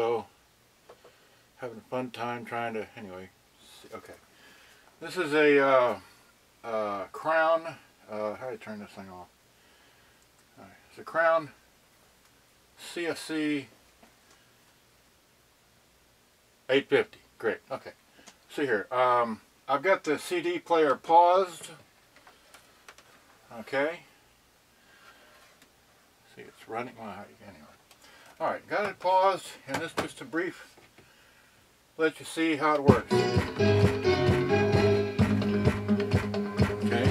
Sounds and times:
Speech: 0.0s - 0.3s, 1.6s - 4.2s, 5.0s - 9.3s, 10.6s - 11.6s, 12.8s - 13.7s, 16.7s - 21.8s, 23.5s - 24.1s, 26.3s - 27.8s, 28.4s - 30.7s, 32.0s - 33.1s, 36.8s - 37.1s
Music: 32.9s - 37.1s.

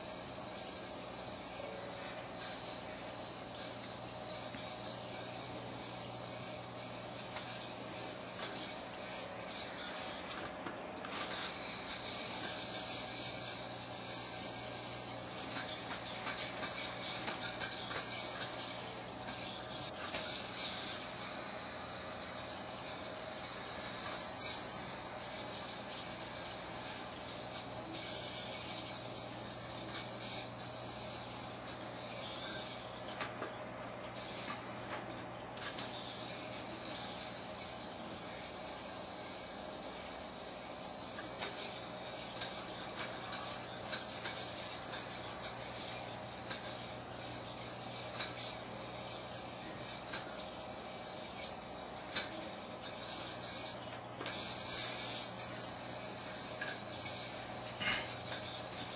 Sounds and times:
Inside, small room: 0.0s - 58.9s.

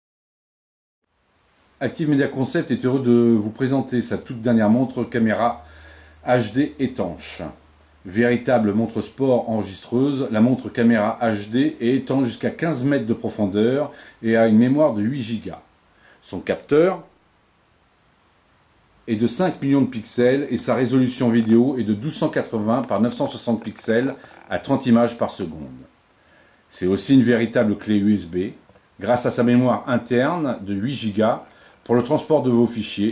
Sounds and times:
Speech: 1.8s - 17.1s, 19.1s - 25.9s, 26.7s - 33.1s.

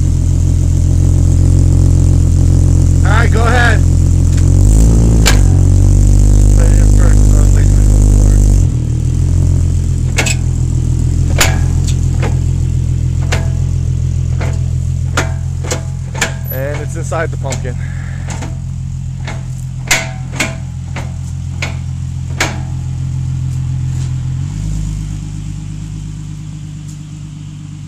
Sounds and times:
Car: 0.0s - 27.8s
Speech: 3.0s - 3.9s, 6.6s - 8.4s, 16.5s - 17.8s.

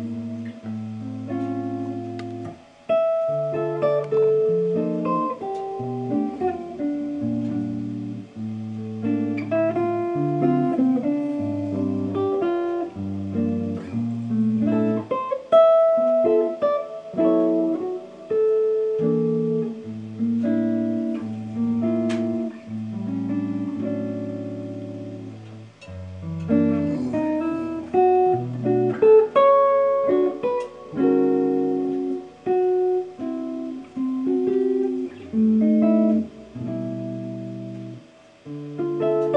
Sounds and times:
Electric guitar: 0.0s - 39.3s.

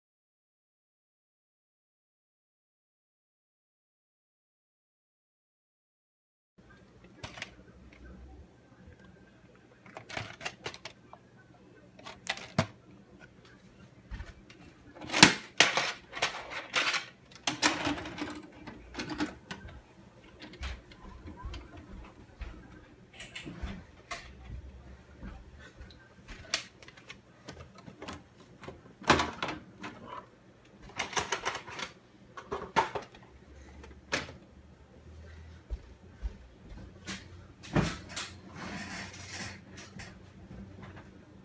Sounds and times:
Inside, small room: 6.6s - 41.4s.

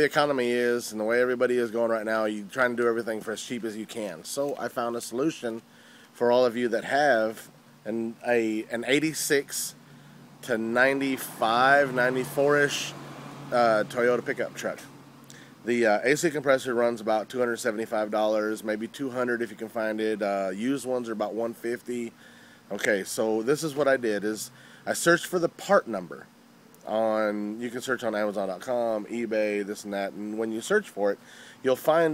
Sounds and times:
Speech: 0.0s - 5.6s, 6.2s - 9.8s, 10.4s - 14.9s, 15.6s - 22.1s, 22.7s - 32.1s
Car: 9.8s - 15.7s.

